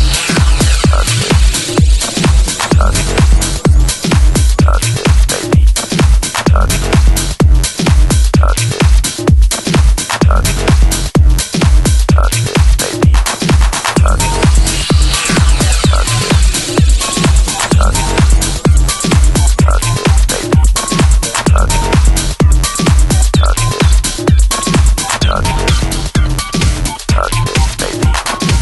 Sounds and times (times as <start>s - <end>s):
House music: 0.0s - 28.6s
Techno: 0.0s - 28.6s
Trance music: 0.0s - 28.6s.